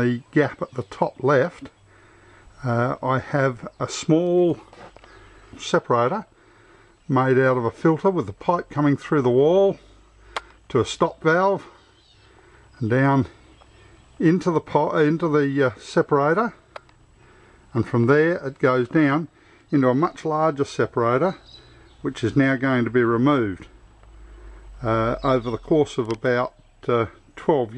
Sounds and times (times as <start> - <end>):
Speech: 0.0 - 1.7, 2.6 - 4.7, 5.6 - 6.3, 7.1 - 9.9, 10.7 - 11.8, 12.8 - 13.4, 14.2 - 16.6, 17.8 - 21.4, 22.0 - 23.8, 24.8 - 27.7.